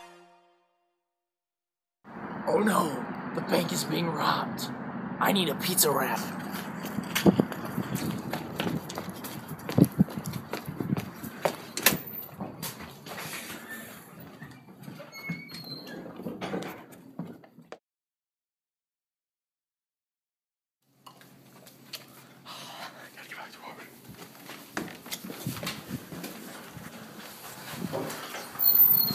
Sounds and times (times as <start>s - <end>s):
Outside, urban or manmade: 0.0s - 17.8s, 20.8s - 29.1s.